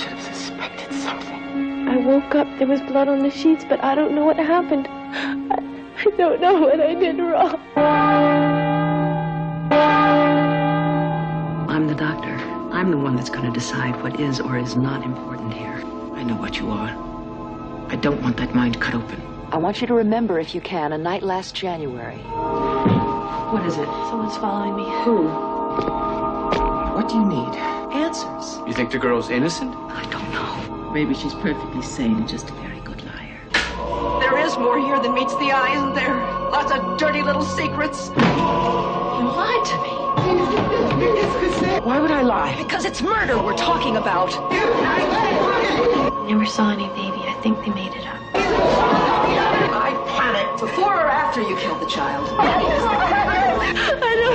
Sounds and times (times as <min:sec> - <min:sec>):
Music: 0:00.0 - 0:54.3.